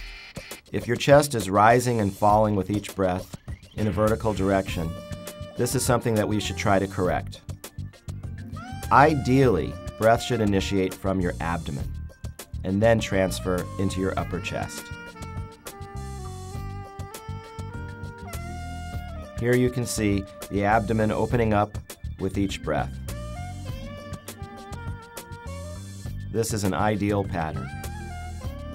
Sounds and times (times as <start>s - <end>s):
Music: 0.0s - 28.7s
Speech: 0.8s - 5.0s, 5.6s - 7.4s, 8.9s - 11.9s, 12.6s - 14.9s, 19.4s - 22.9s, 26.4s - 27.6s.